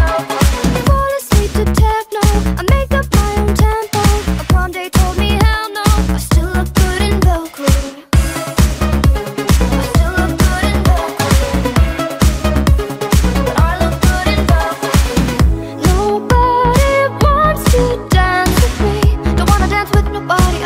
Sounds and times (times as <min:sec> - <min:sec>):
Music: 0:00.0 - 0:20.6.